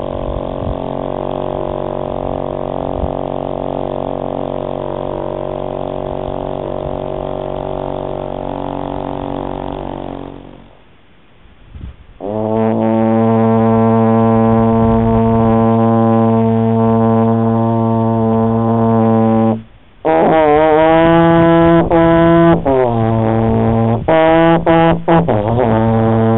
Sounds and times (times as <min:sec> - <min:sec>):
French horn: 0:00.0 - 0:10.9, 0:12.2 - 0:26.3.